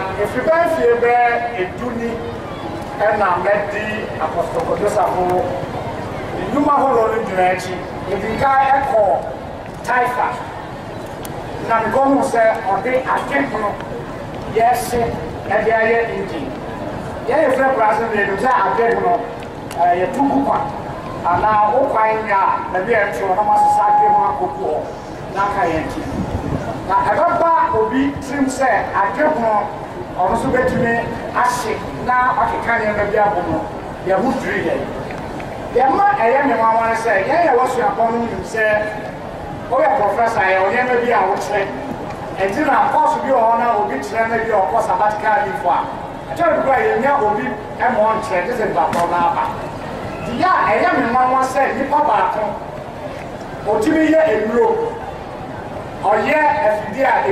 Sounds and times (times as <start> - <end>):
Male speech, man speaking: 0.0 - 2.3, 3.0 - 5.6, 6.4 - 10.5, 11.6 - 13.9, 14.5 - 16.6, 17.3 - 26.1, 26.9 - 34.9, 35.8 - 39.1, 39.7 - 41.8, 42.4 - 49.6, 50.3 - 52.6, 53.7 - 55.0, 56.0 - 57.3
Narration, monologue: 0.0 - 55.1, 55.8 - 57.3.